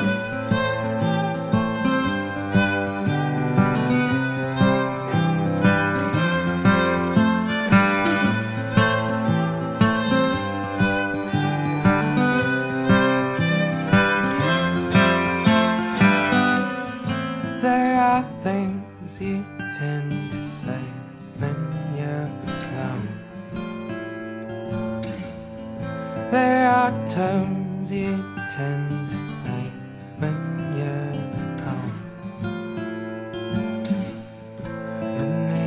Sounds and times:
Music: 0.0s - 35.6s.

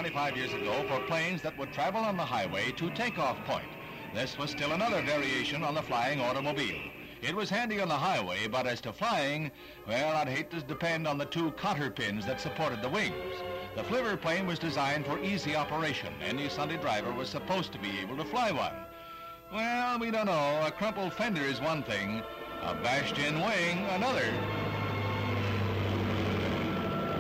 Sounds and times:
Speech: 0.0s - 13.2s, 13.8s - 18.8s, 19.5s - 24.4s
Music: 0.0s - 27.2s.

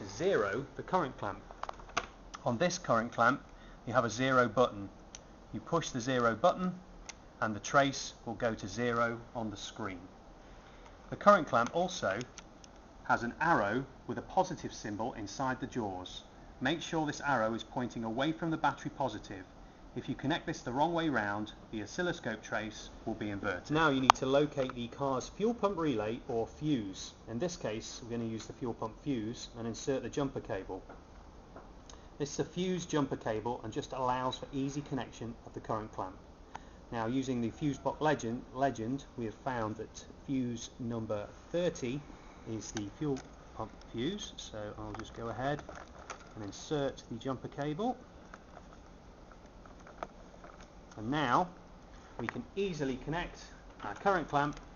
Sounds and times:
Speech: 0.0s - 1.5s, 2.4s - 6.8s, 7.4s - 10.1s, 11.1s - 12.4s, 13.1s - 30.9s, 32.2s - 36.2s, 36.9s - 45.8s, 46.4s - 48.0s, 51.0s - 51.6s, 52.2s - 54.6s.

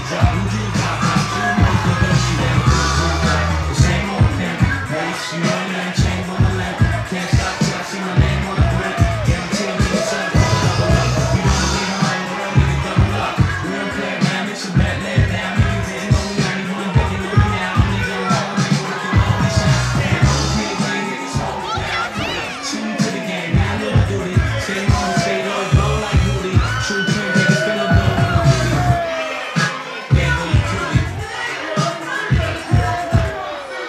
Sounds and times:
Music: 0.0s - 33.8s.

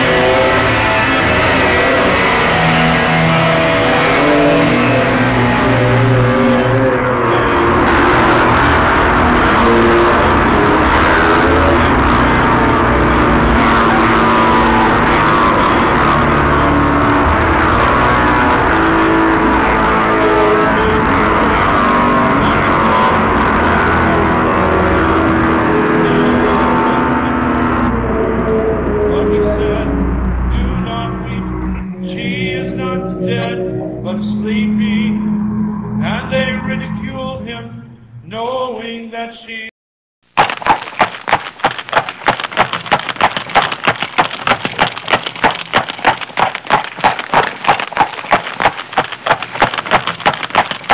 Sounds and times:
Electric guitar: 0.0s - 38.2s
Electronica: 0.0s - 38.7s.

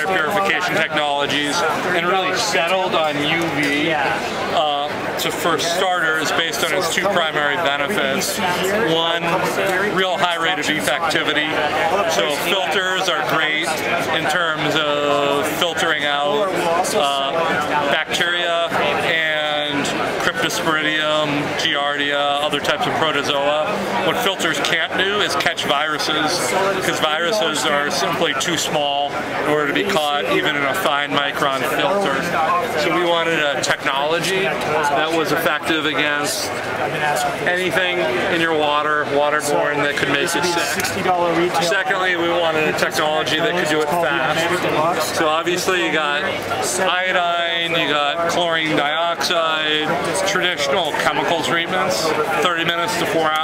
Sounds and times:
Speech: 0.0s - 53.4s.

